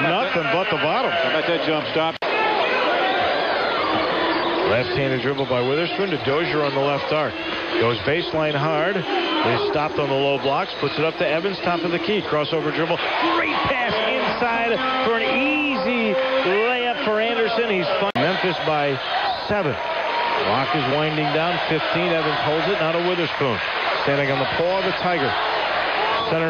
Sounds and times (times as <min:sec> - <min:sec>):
Speech: 0:00.0 - 0:02.2, 0:04.7 - 0:19.8, 0:20.4 - 0:25.4, 0:26.3 - 0:26.5.